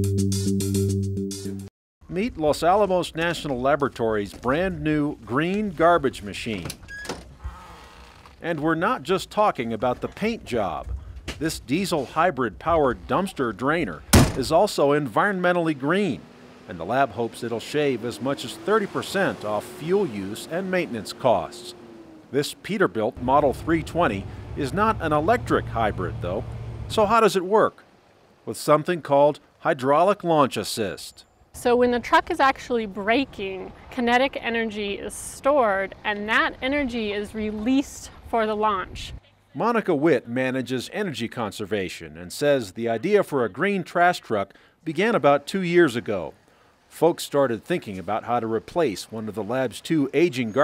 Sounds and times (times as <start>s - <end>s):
Speech: 2.1s - 6.8s, 8.4s - 21.8s, 22.4s - 27.8s, 28.5s - 50.6s
Truck: 15.2s - 28.4s.